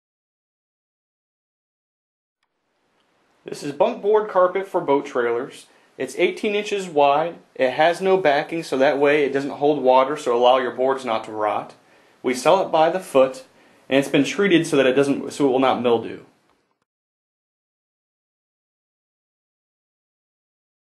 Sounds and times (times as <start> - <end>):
Speech: 3.5 - 16.4.